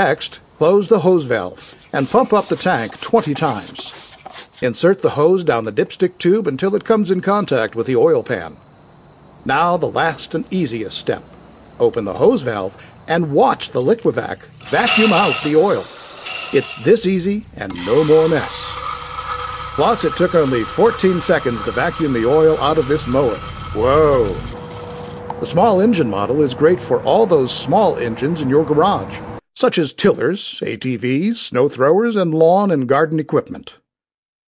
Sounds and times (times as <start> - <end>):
Speech: 0.0 - 8.6, 9.5 - 15.9, 16.6 - 18.7, 19.8 - 24.5, 25.4 - 33.8.